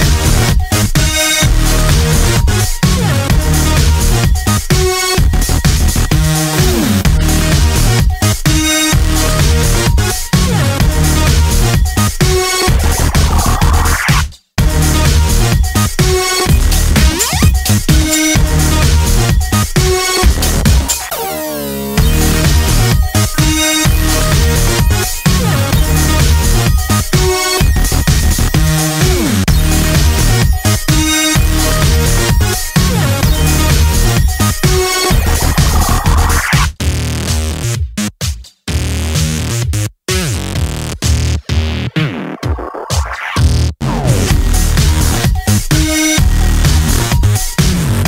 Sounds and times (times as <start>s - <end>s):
Music: 0.0s - 48.0s.